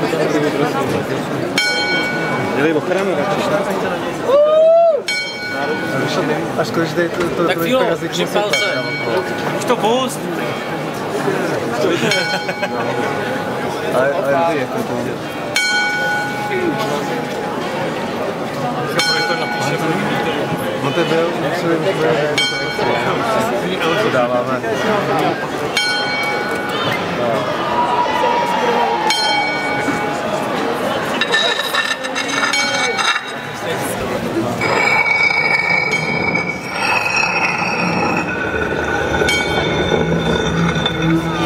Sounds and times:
Speech: 0.0 - 4.6, 5.4 - 34.6.

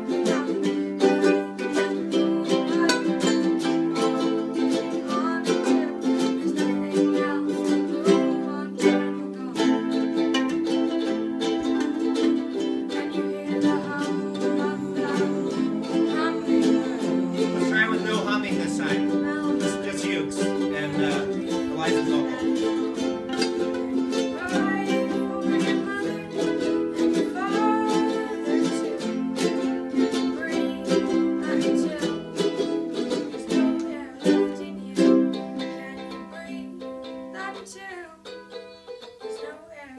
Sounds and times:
Ukulele: 0.0 - 39.9.

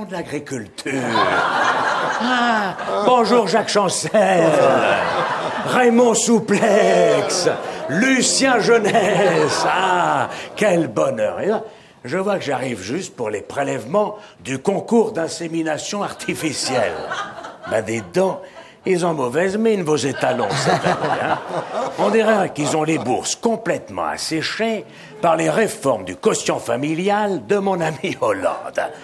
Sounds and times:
Speech: 0.0 - 1.3, 2.2 - 5.0, 5.6 - 17.1, 17.7 - 20.8, 22.0 - 29.0.

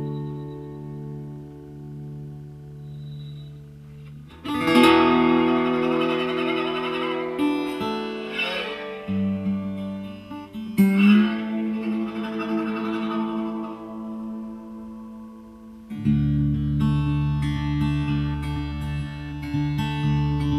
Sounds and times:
Plucked string instrument: 0.0 - 20.5.

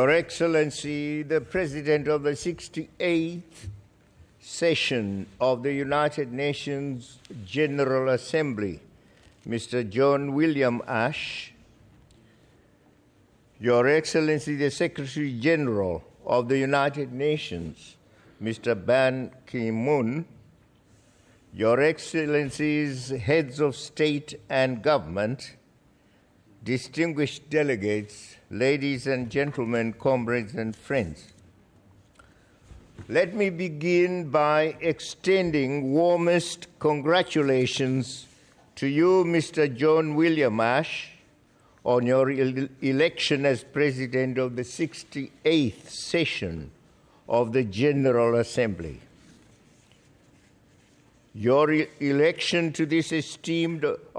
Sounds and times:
Male speech, man speaking: 0.0 - 3.7, 4.4 - 8.9, 9.5 - 11.6, 13.6 - 20.4, 21.6 - 25.6, 26.6 - 31.4, 33.1 - 41.2, 41.8 - 49.1, 51.4 - 54.1.

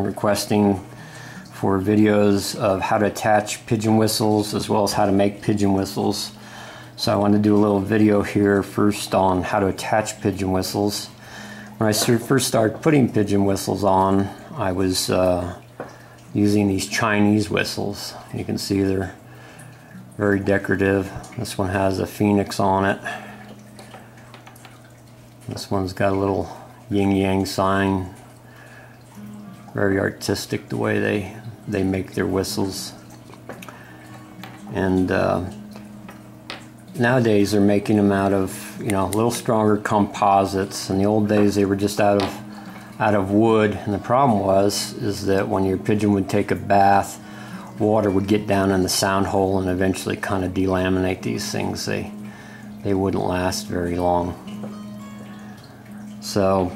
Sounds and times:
Speech: 0.0 - 0.9, 1.6 - 6.4, 7.0 - 11.2, 11.8 - 15.6, 16.4 - 19.2, 20.2 - 23.2, 25.5 - 28.2, 29.8 - 33.0, 34.7 - 35.6, 36.9 - 42.4, 43.0 - 47.2, 47.8 - 52.2, 52.8 - 54.4, 56.2 - 56.7
Music: 0.0 - 15.6, 16.2 - 24.4, 28.9 - 56.7.

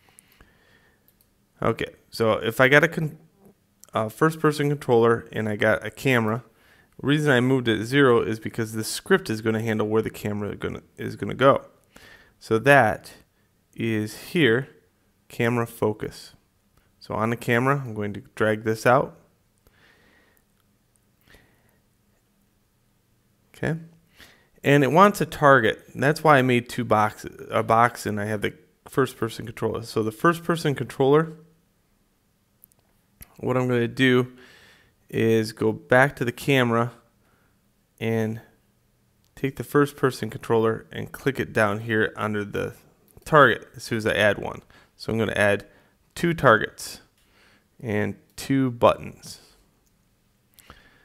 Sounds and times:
Speech: 1.6 - 11.8, 12.4 - 16.4, 17.0 - 19.3, 23.5 - 24.0, 24.6 - 31.4, 33.2 - 34.4, 35.1 - 37.1, 38.0 - 38.6, 39.4 - 47.1, 47.8 - 49.6.

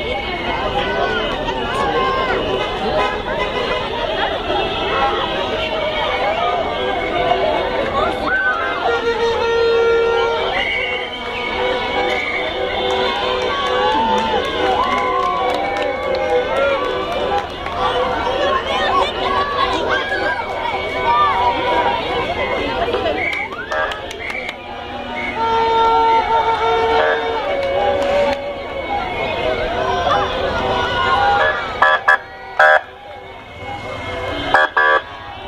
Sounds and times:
Speech: 0.0 - 9.5, 13.7 - 24.7
Vehicle: 0.0 - 35.4.

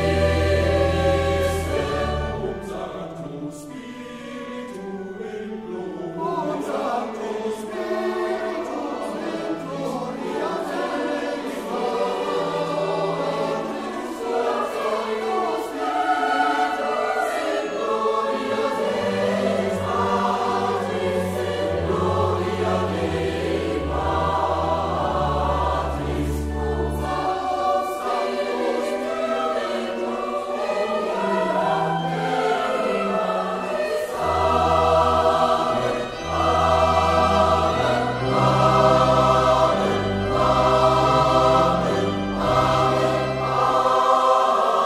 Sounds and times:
Choir: 0.0 - 44.8
Opera: 0.0 - 44.8.

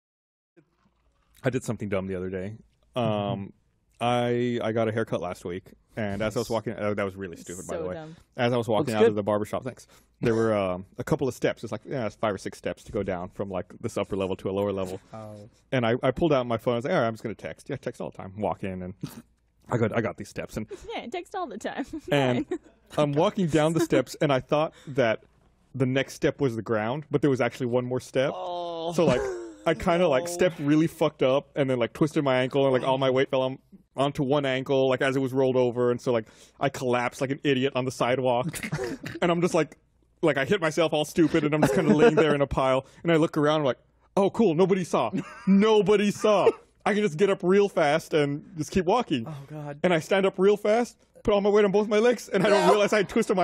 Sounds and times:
Speech: 1.4 - 25.2, 25.8 - 53.4.

